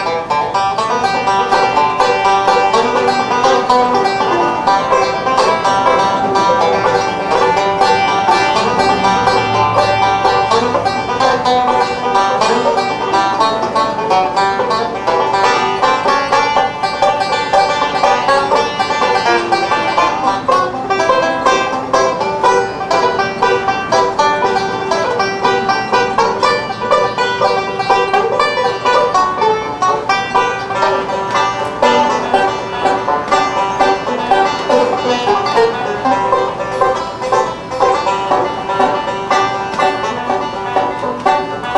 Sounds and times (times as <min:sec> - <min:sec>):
Banjo: 0:00.0 - 0:41.7
Bluegrass: 0:00.0 - 0:41.7.